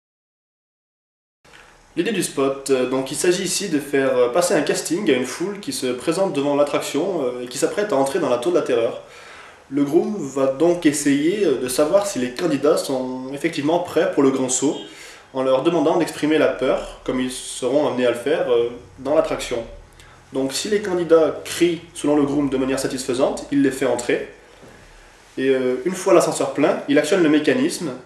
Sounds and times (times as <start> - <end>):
Speech: 2.0 - 9.1, 9.7 - 24.4, 25.4 - 28.0.